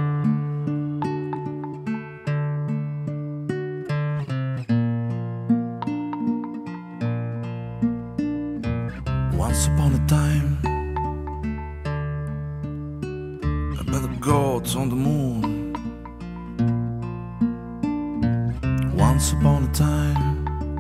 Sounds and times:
Music: 0:00.0 - 0:20.8.

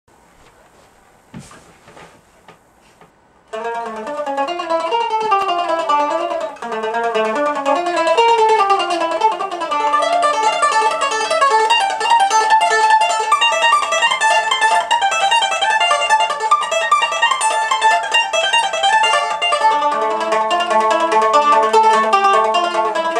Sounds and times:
Guitar: 0:02.8 - 0:23.1
Mandolin: 0:03.5 - 0:23.1.

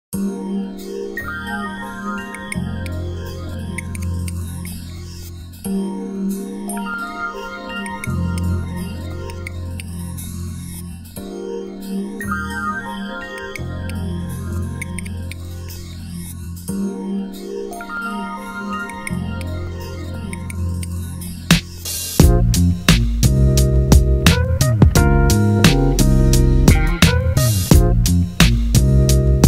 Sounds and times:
Synthesizer: 0:00.1 - 0:29.4.

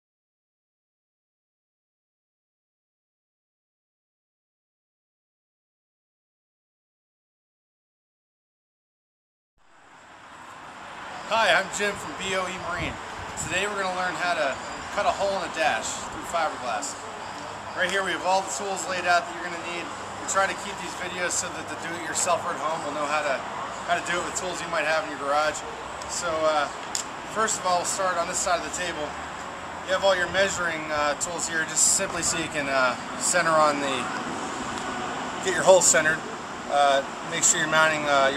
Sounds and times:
Speech: 0:11.3 - 0:17.0, 0:17.8 - 0:29.2, 0:29.9 - 0:34.2, 0:35.4 - 0:38.3.

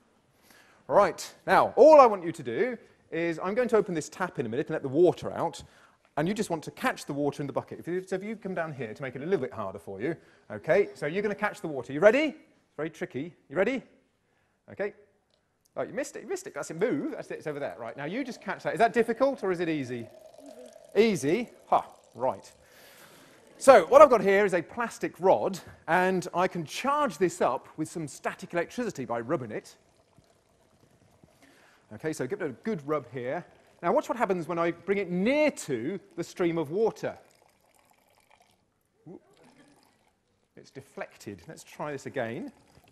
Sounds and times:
Speech: 0:00.9 - 0:13.9, 0:14.7 - 0:15.0, 0:15.8 - 0:20.1, 0:21.0 - 0:22.6, 0:23.6 - 0:29.8, 0:31.9 - 0:37.2, 0:40.6 - 0:42.6.

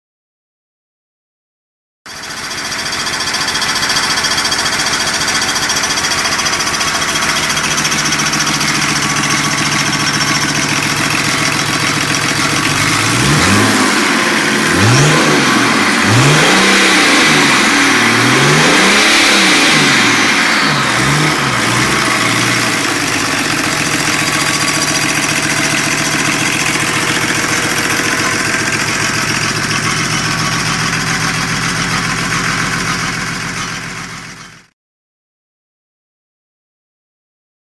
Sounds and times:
Idling: 0:02.1 - 0:34.7.

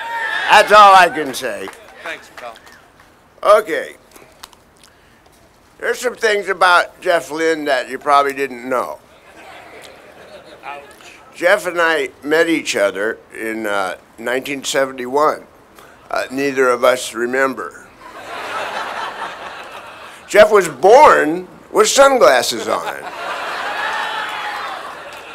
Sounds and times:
Speech: 0:05.8 - 0:09.0, 0:10.6 - 0:15.5, 0:20.3 - 0:23.1.

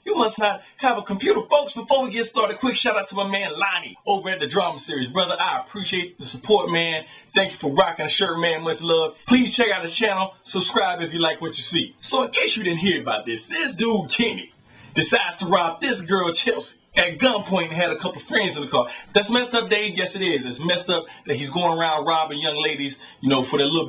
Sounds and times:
Speech: 0:00.0 - 0:23.8.

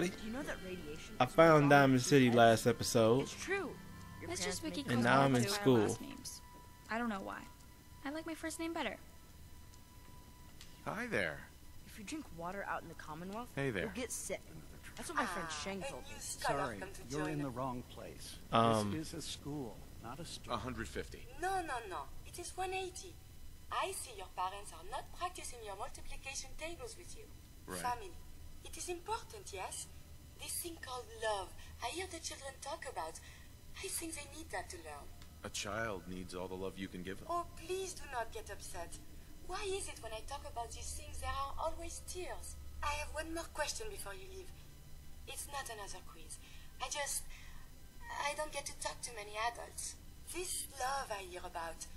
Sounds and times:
Speech: 0:00.0 - 0:09.0, 0:10.9 - 0:23.1, 0:23.7 - 0:33.2, 0:33.8 - 0:44.5
Inside, small room: 0:00.0 - 0:51.9.

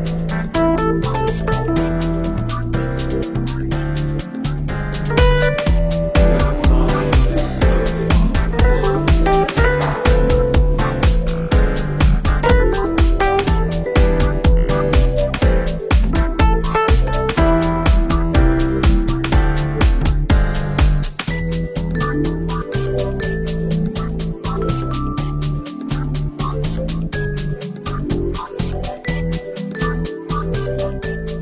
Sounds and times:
Music: 0:00.0 - 0:31.4.

